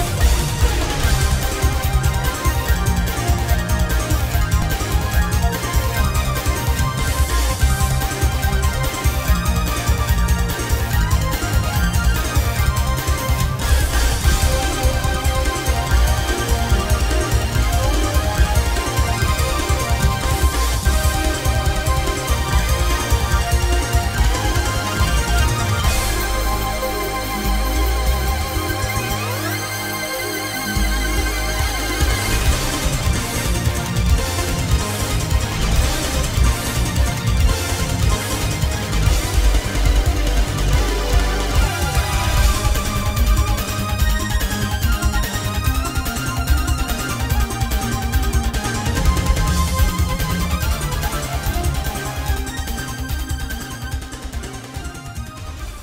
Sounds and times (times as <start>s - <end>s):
Music: 0.0s - 55.8s.